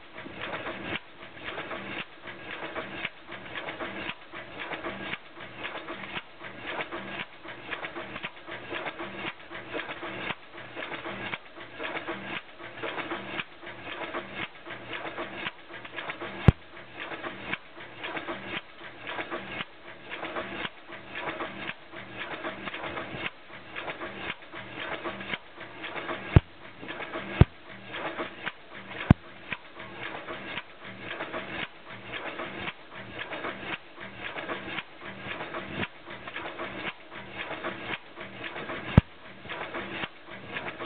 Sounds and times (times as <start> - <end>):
Heavy engine (low frequency): 0.0 - 40.8.